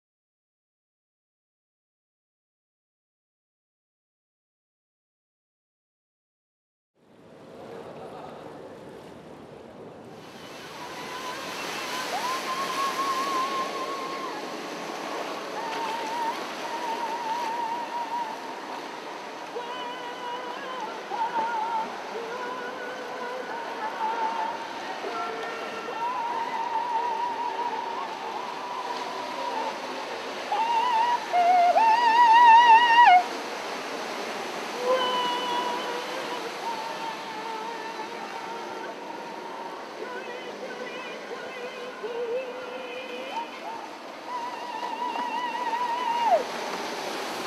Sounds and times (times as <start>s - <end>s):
Synthetic singing: 19.5s - 33.3s, 34.8s - 46.4s.